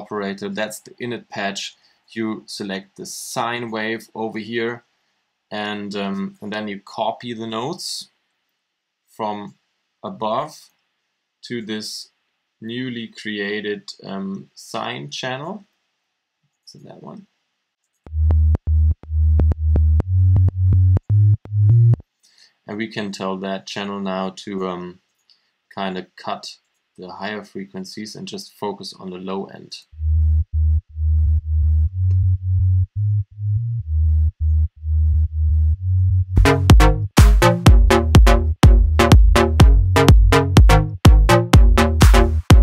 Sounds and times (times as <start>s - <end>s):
Speech: 0.0s - 4.9s, 5.5s - 8.2s, 9.1s - 10.8s, 11.4s - 15.7s, 16.7s - 17.3s, 22.7s - 25.0s, 25.7s - 29.9s
Music: 18.1s - 22.0s, 30.0s - 42.6s.